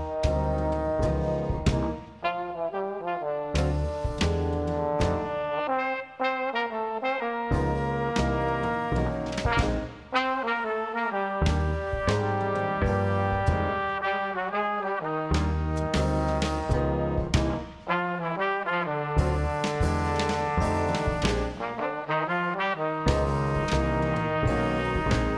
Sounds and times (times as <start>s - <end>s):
Orchestra: 0.0s - 25.3s.